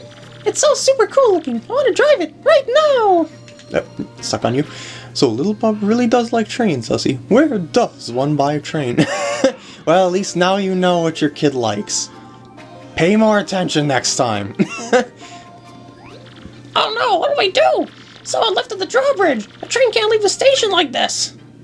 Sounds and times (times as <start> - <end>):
Music: 0.0 - 21.6
Speech: 0.5 - 9.0, 13.0 - 14.5, 16.8 - 21.4.